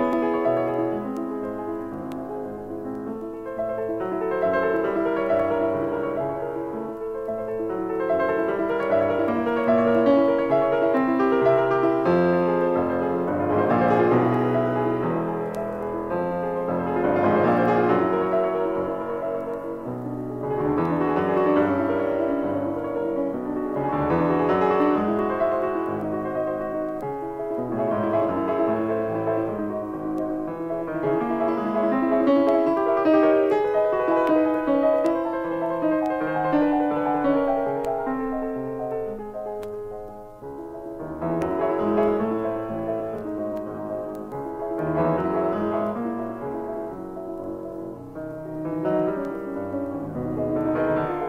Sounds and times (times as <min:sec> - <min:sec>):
Music: 0:00.0 - 0:51.2.